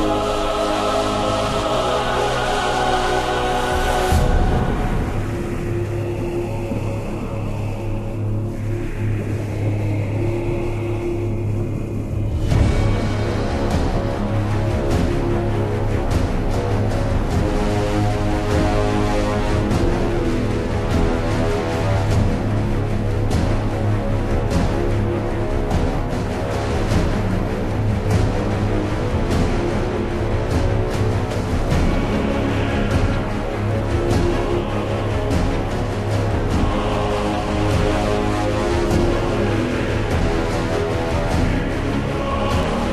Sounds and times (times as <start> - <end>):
Angry music: 0.0 - 42.9.